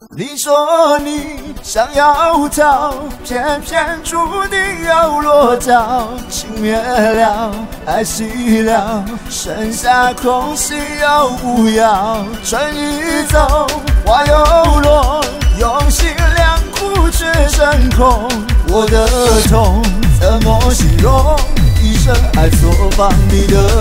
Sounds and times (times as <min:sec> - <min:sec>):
Music: 0:00.0 - 0:23.8.